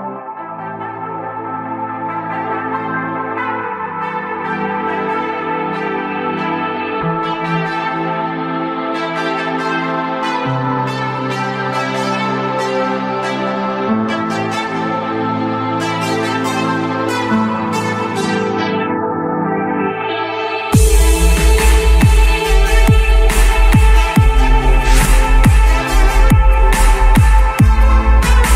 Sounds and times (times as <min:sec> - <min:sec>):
Ambient music: 0:00.0 - 0:28.5.